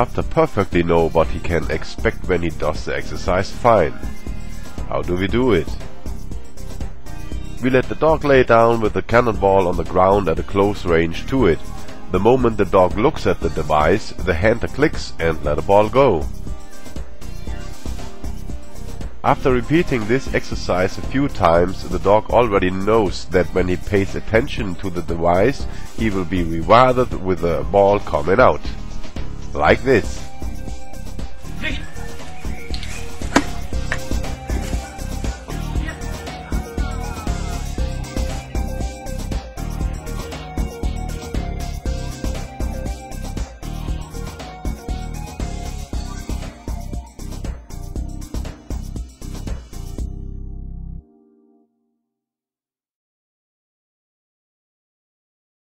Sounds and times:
Speech: 0.0s - 4.1s, 4.9s - 5.8s, 7.6s - 16.3s, 19.2s - 28.8s, 29.5s - 30.3s
Music: 0.0s - 52.4s.

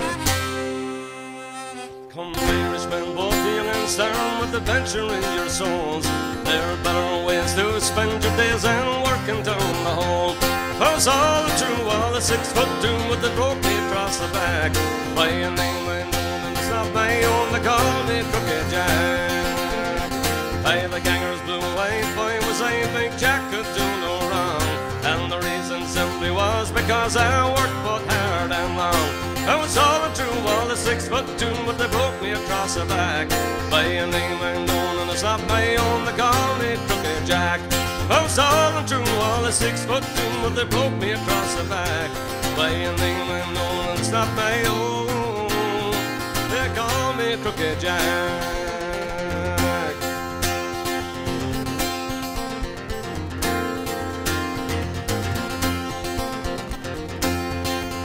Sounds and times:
Bluegrass: 0.0s - 58.0s
Folk music: 0.0s - 58.0s
Singing: 1.4s - 50.0s.

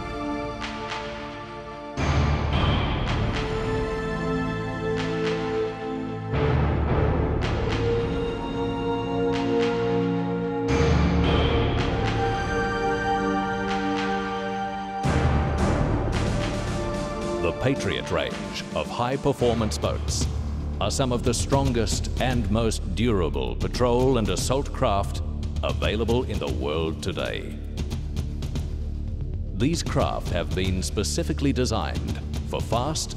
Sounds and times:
Background music: 0.0s - 33.1s.

